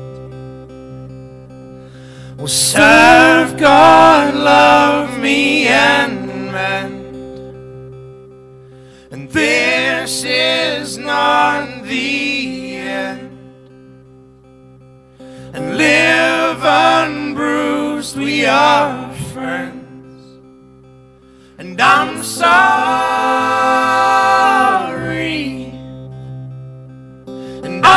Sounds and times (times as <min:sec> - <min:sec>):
Music: 0:00.0 - 0:27.9.